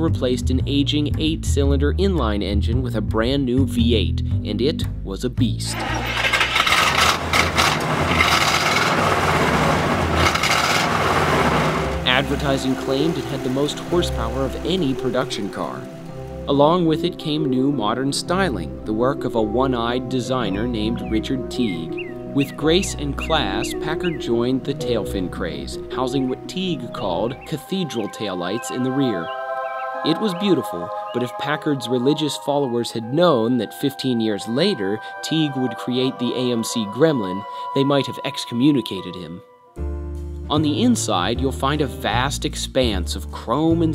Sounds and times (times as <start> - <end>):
Speech: 0.0 - 5.9, 12.1 - 15.9, 16.5 - 29.3, 30.1 - 39.4, 40.5 - 43.9
Music: 0.0 - 6.6, 11.8 - 43.9
Car: 5.7 - 16.4
Outside, urban or manmade: 5.7 - 17.2, 20.5 - 30.1.